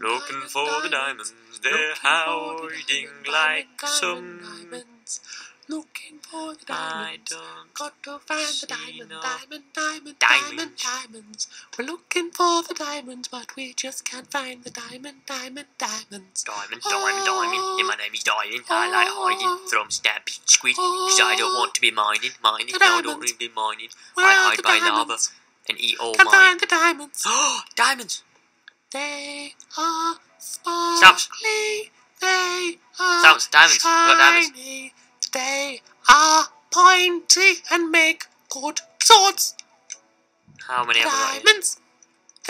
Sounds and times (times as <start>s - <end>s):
Speech: 0.0s - 28.2s, 29.0s - 39.6s, 40.6s - 41.8s.